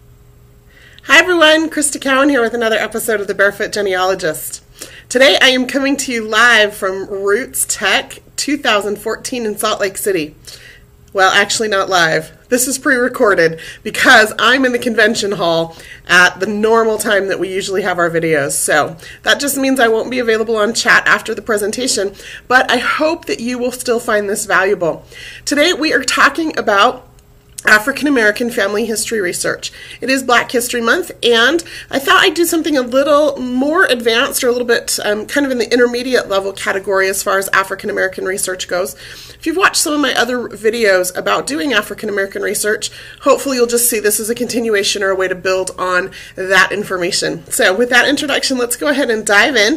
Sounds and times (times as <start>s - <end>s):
Speech: 1.0s - 10.4s, 11.1s - 27.0s, 27.6s - 49.7s.